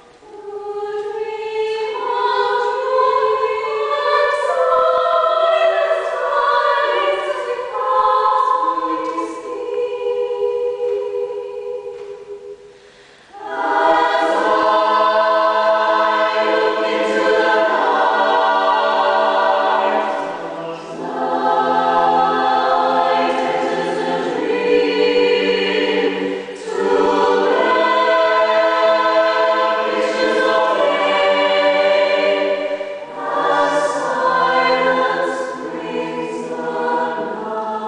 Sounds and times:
Choir: 0:00.0 - 0:37.8.

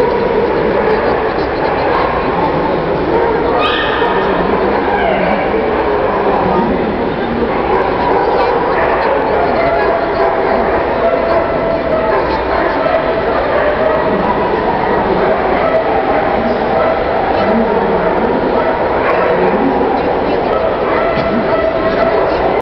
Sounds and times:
Bow-wow: 0:00.0 - 0:22.6
Speech: 0:00.0 - 0:22.6.

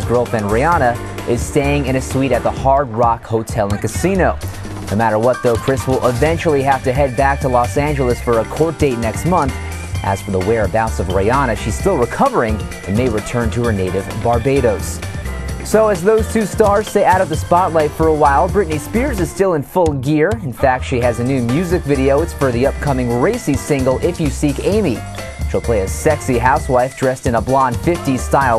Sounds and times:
Speech: 0:00.0 - 0:15.0, 0:15.6 - 0:28.5
Music: 0:00.0 - 0:28.5.

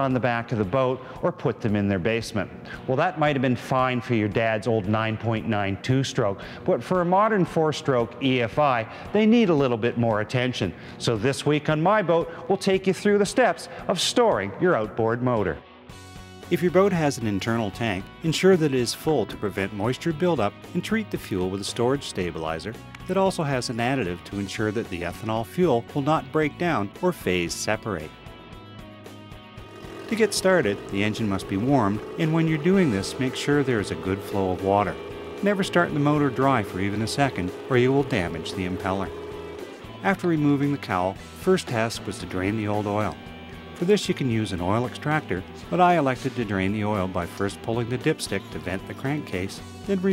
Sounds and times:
Speech: 0:00.0 - 0:15.6, 0:16.5 - 0:28.1, 0:30.1 - 0:39.1, 0:40.0 - 0:43.2, 0:43.8 - 0:50.1
Music: 0:00.0 - 0:50.1.

